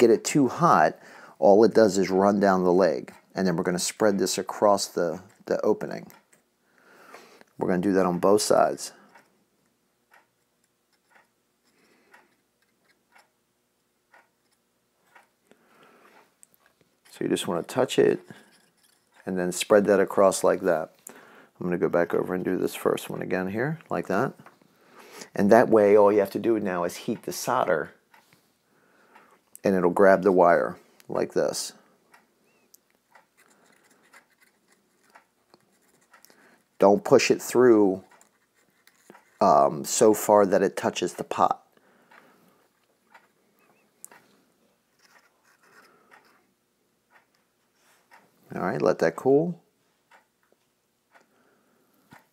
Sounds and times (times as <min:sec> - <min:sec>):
Speech: 0:00.0 - 0:06.1, 0:07.6 - 0:09.0, 0:17.1 - 0:18.3, 0:19.2 - 0:20.9, 0:21.6 - 0:24.4, 0:25.3 - 0:28.0, 0:29.6 - 0:31.8, 0:36.8 - 0:38.1, 0:39.4 - 0:41.7, 0:48.5 - 0:49.6.